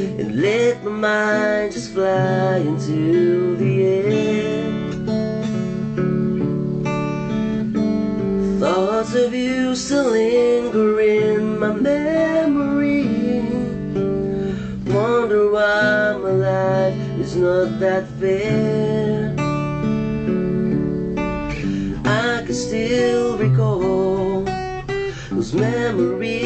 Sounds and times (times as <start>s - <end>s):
Acoustic guitar: 0.0s - 26.4s
Strum: 0.0s - 26.4s.